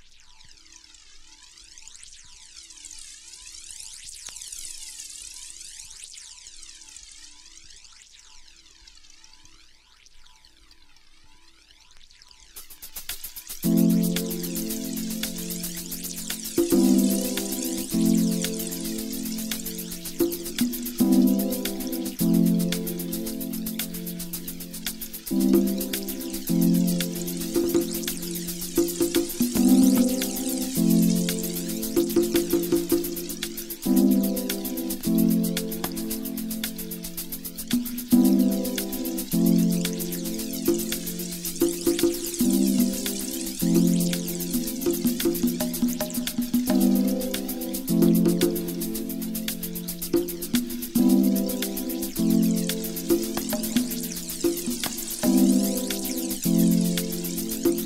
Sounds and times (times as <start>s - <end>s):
Music: 12.6s - 57.8s.